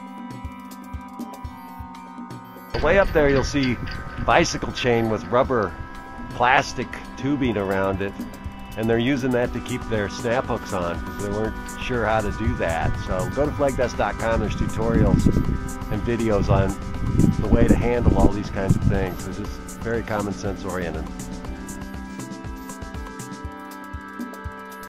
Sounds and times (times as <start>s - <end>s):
Music: 0.0s - 24.8s
Speech: 2.8s - 5.7s, 6.4s - 8.2s, 8.8s - 15.2s, 15.9s - 16.8s, 17.4s - 21.1s.